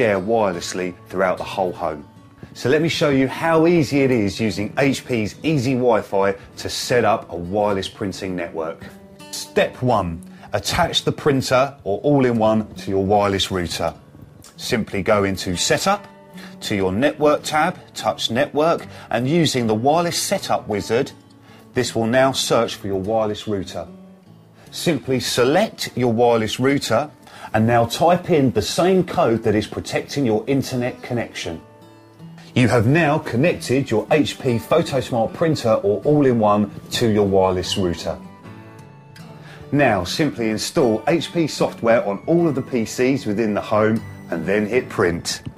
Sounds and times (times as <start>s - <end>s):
Speech: 0.0s - 21.2s, 21.8s - 23.9s, 24.7s - 31.6s, 32.5s - 38.3s, 39.7s - 45.5s
Music: 0.0s - 45.5s.